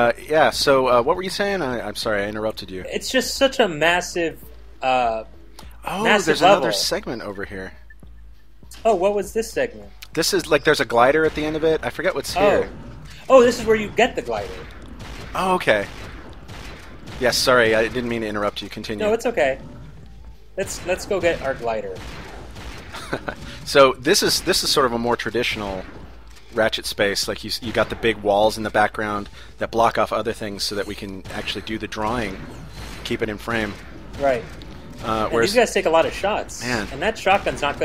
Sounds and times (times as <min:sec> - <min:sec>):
Speech: 0:05.9 - 0:07.5, 0:10.3 - 0:12.7, 0:15.4 - 0:15.9, 0:35.0 - 0:37.8.